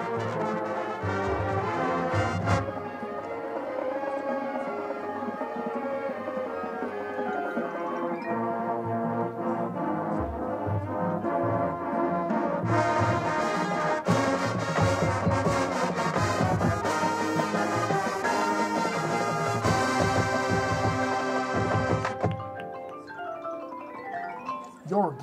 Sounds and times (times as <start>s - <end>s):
Music: 0.0s - 25.2s
Outside, urban or manmade: 0.0s - 25.2s.